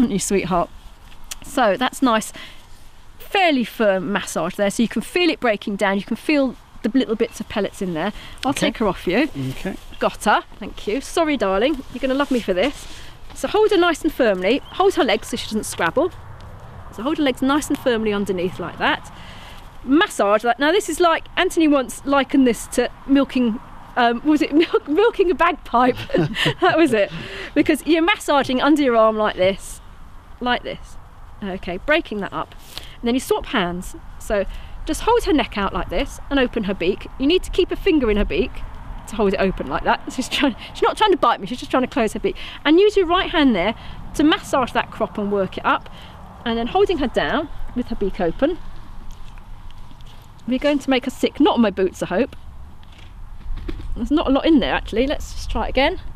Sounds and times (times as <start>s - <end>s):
Speech: 0.0s - 0.7s, 1.4s - 2.4s, 3.2s - 12.8s, 13.4s - 16.1s, 17.0s - 19.1s, 19.9s - 29.8s, 30.4s - 45.9s, 46.5s - 48.6s, 50.5s - 52.4s, 54.0s - 56.0s.